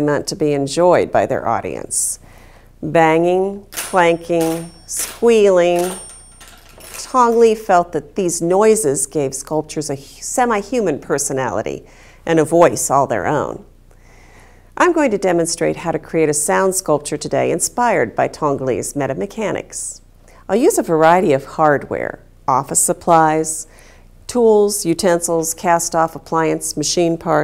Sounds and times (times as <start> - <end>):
Speech: 0.0 - 2.2, 2.8 - 6.0, 7.0 - 13.7, 14.8 - 23.7, 24.3 - 27.4.